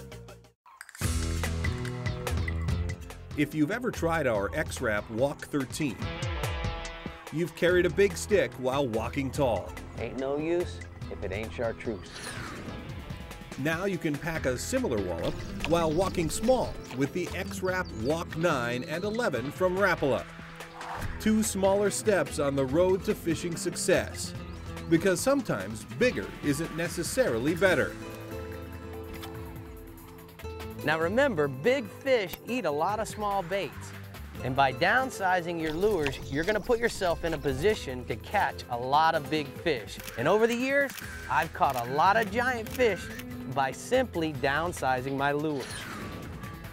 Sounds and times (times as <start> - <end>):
Music: 0.0 - 46.7
Speech: 3.4 - 6.1, 7.3 - 12.1, 13.6 - 20.2, 21.2 - 24.3, 24.9 - 27.9, 30.8 - 45.8.